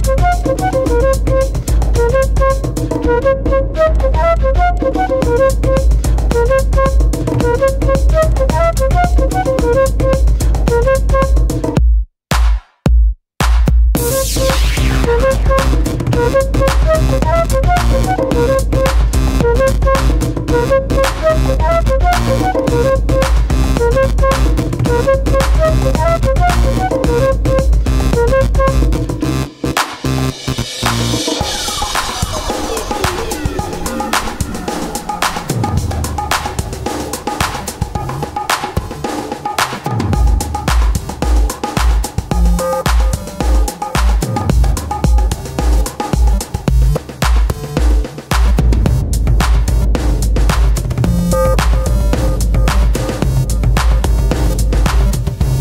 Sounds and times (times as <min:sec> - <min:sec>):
Electronica: 0:14.0 - 0:55.6.